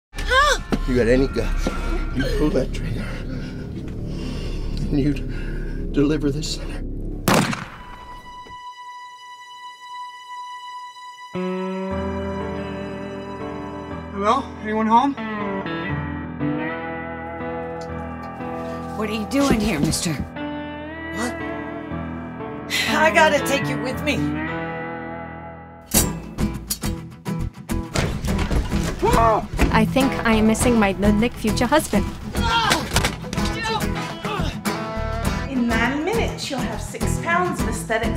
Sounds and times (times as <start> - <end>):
Music: 0.2 - 38.1
Gunshot, gunfire: 7.3 - 8.1.